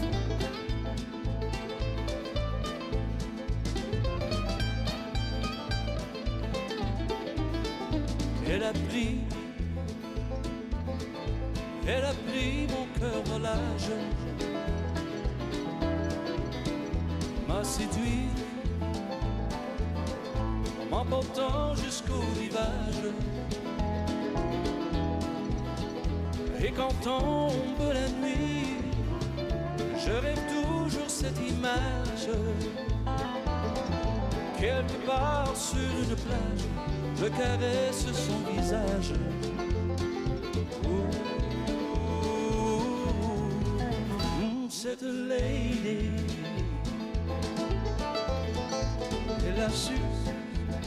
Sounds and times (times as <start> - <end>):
Music: 0.0 - 50.8.